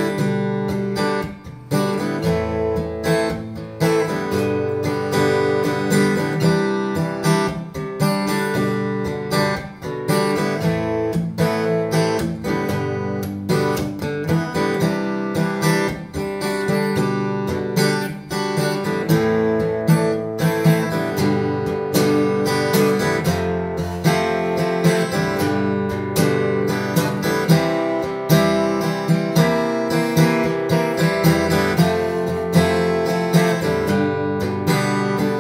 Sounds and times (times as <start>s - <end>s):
Music: 0.0s - 35.4s.